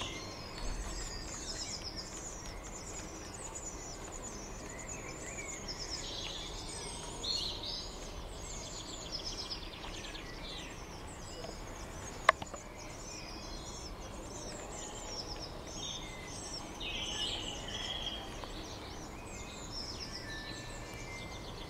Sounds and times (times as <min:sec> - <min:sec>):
Bird: 0:00.0 - 0:21.7
Environmental noise: 0:00.0 - 0:21.7.